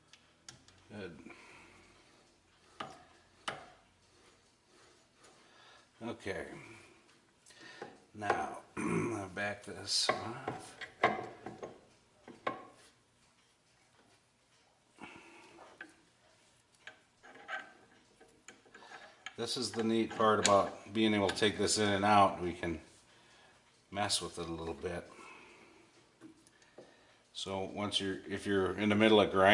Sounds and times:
Speech: 6.0 - 6.8, 8.2 - 10.6, 19.4 - 22.9, 23.9 - 25.1, 27.4 - 29.5.

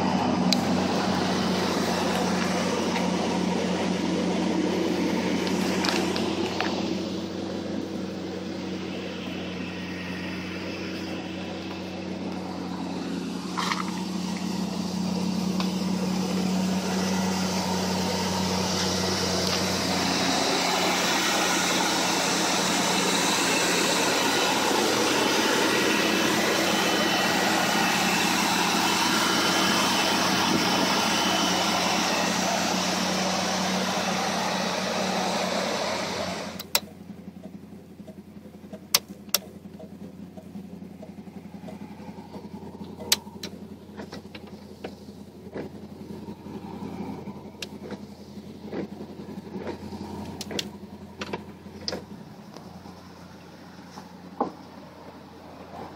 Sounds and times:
Car: 0.0 - 55.9
Outside, urban or manmade: 0.0 - 55.9.

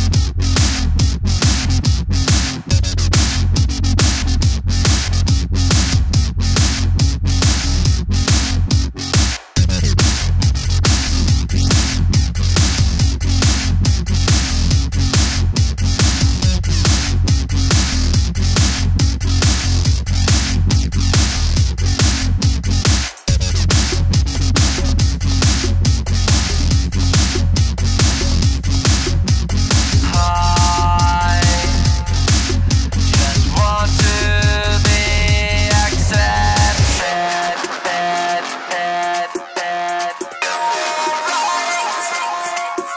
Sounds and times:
Dubstep: 0.0 - 42.9
Techno: 0.0 - 42.9
Trance music: 0.0 - 42.9.

